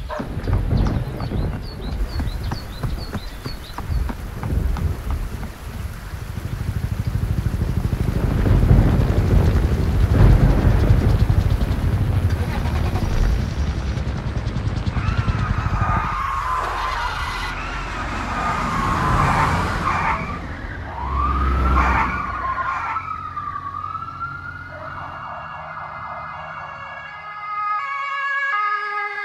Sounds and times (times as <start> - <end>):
Sound effect: 12.4 - 23.0.